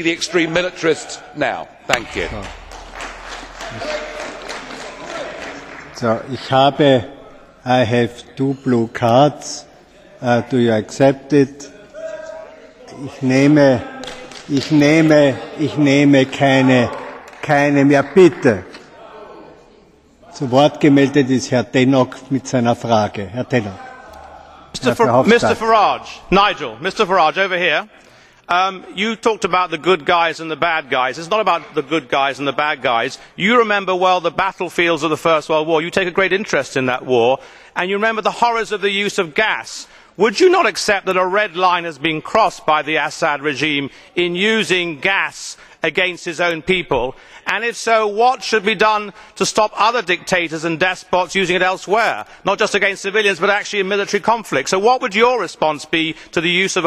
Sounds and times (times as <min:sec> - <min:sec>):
Speech: 0:00.0 - 0:02.6, 0:06.0 - 0:19.5, 0:20.2 - 0:56.8.